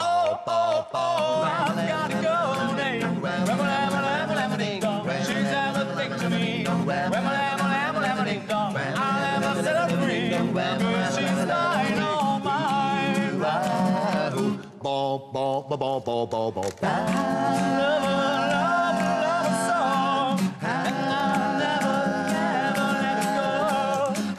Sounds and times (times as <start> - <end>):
Music: 0.0 - 14.7, 16.8 - 24.3.